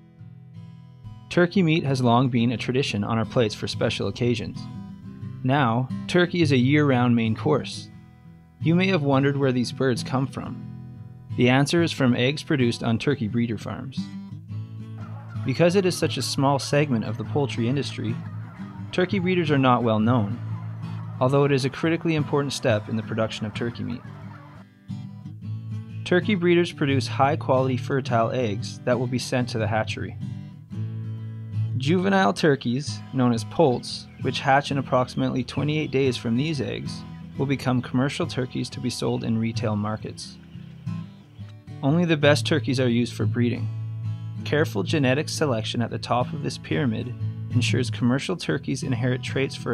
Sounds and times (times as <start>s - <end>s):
Music: 0.0s - 49.7s
Speech: 1.3s - 4.7s, 5.4s - 7.9s, 8.6s - 10.6s, 11.4s - 14.0s, 15.5s - 18.2s, 18.9s - 20.4s, 21.2s - 24.0s, 26.0s - 30.2s, 31.8s - 40.4s, 41.8s - 43.7s, 44.4s - 49.7s
Bird: 14.9s - 24.7s, 33.2s - 42.0s.